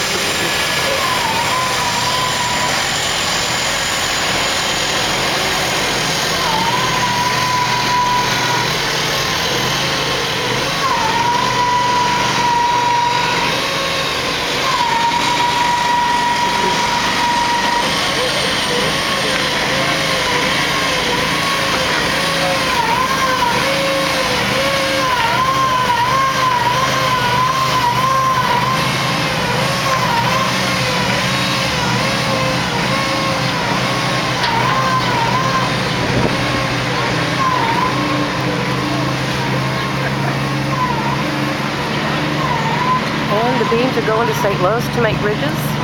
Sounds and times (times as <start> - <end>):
Vehicle: 0.0 - 45.8.